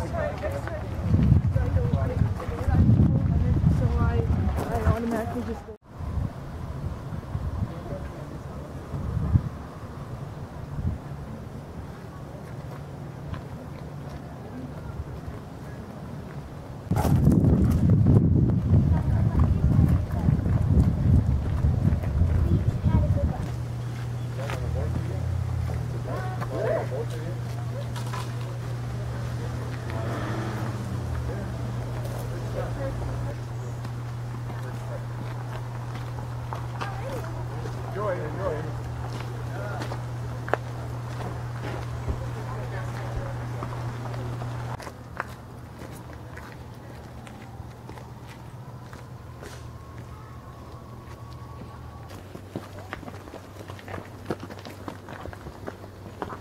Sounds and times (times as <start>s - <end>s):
Speech: 0.0s - 5.8s, 7.6s - 8.8s, 18.8s - 23.6s, 24.2s - 25.4s, 42.0s - 43.9s.